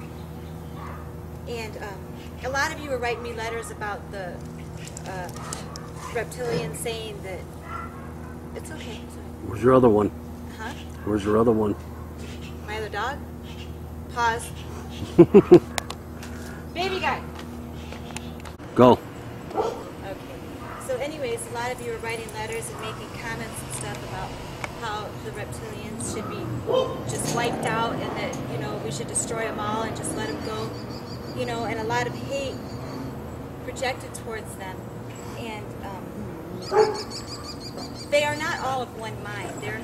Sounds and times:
Outside, urban or manmade: 0.0 - 39.8
Speech: 1.5 - 4.4, 6.2 - 7.4, 8.6 - 11.8, 20.1 - 26.5, 27.1 - 30.7, 31.4 - 32.6.

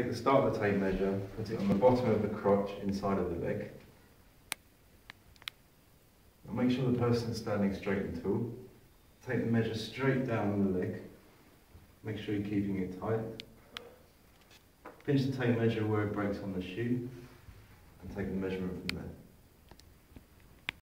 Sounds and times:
Speech: 0.0 - 3.9, 6.5 - 11.2, 12.0 - 13.5, 15.0 - 17.2, 18.0 - 19.3.

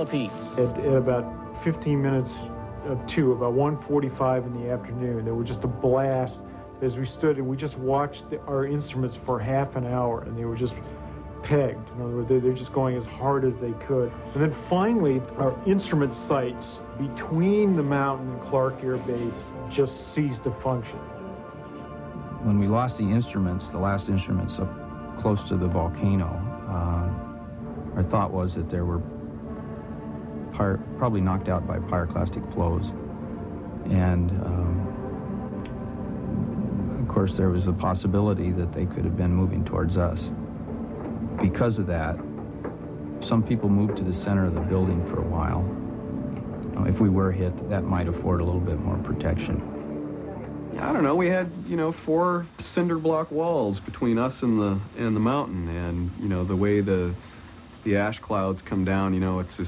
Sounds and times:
Speech: 0.0 - 10.8, 11.4 - 21.1, 22.4 - 27.2, 28.0 - 29.1, 30.6 - 33.0, 33.9 - 34.9, 37.0 - 40.4, 41.4 - 42.2, 43.2 - 45.7, 46.7 - 49.7, 50.3 - 57.2, 57.8 - 59.6
Music: 0.0 - 59.6.

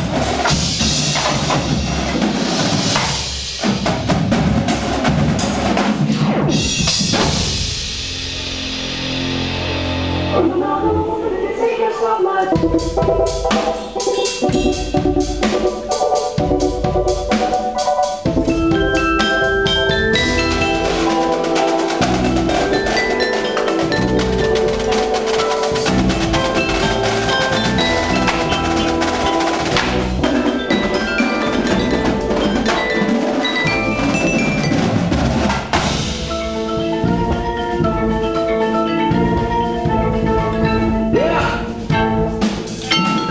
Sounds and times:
Percussion: 0.0 - 10.7, 12.5 - 43.3.

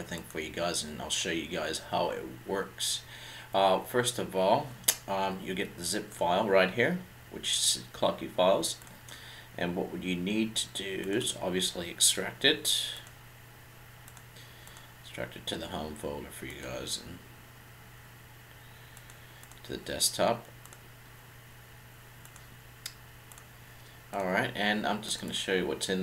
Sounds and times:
Speech: 0.0 - 8.8, 9.6 - 13.0, 15.1 - 17.3, 19.6 - 20.5, 24.1 - 26.0.

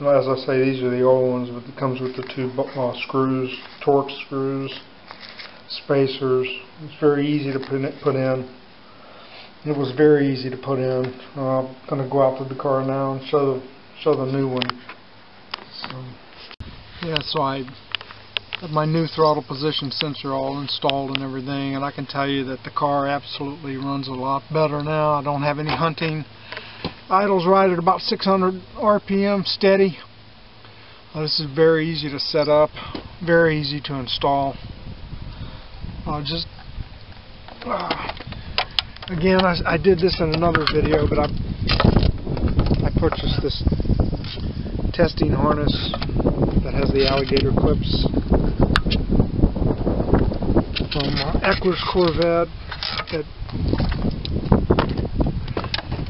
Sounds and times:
Speech: 0.0 - 4.9, 5.7 - 8.6, 9.6 - 14.8, 15.7 - 16.2, 17.0 - 17.8, 18.6 - 26.3, 27.1 - 30.1, 31.1 - 34.6, 36.0 - 36.5, 37.6 - 38.2, 39.1 - 41.4, 42.8 - 43.7, 44.9 - 48.2, 50.9 - 53.3.

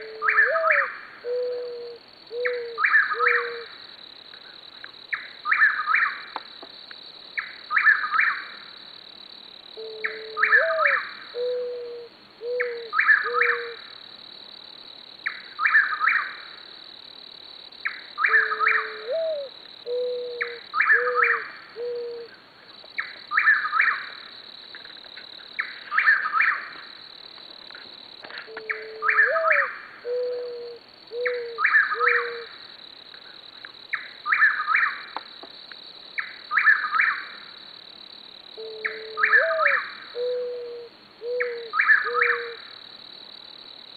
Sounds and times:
Coo: 0.0 - 3.7, 9.8 - 13.8, 18.3 - 22.3, 28.5 - 32.5, 38.6 - 42.6.

